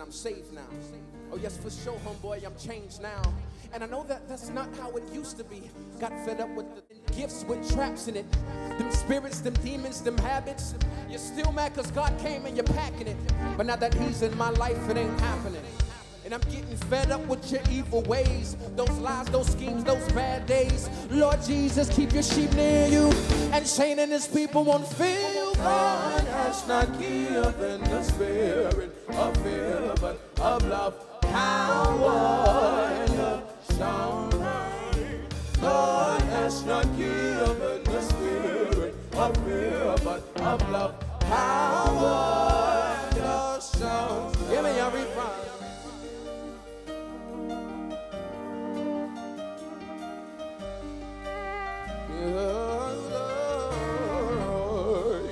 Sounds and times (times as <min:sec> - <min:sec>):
Music: 0:00.0 - 0:55.3.